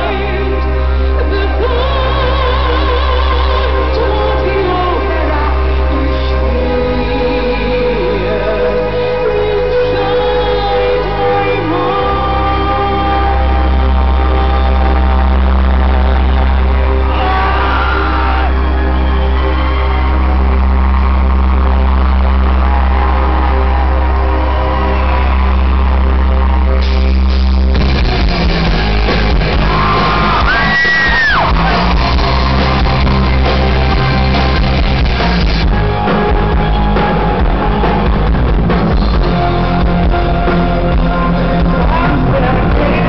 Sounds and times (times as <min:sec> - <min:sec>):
Music: 0:00.0 - 0:43.0.